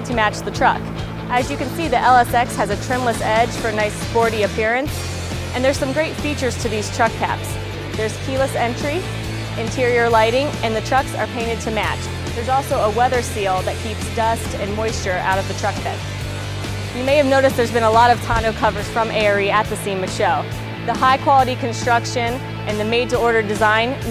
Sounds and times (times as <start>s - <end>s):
Speech: 0.0s - 4.9s, 5.6s - 9.0s, 9.6s - 16.0s, 17.0s - 24.1s
Music: 0.0s - 24.1s.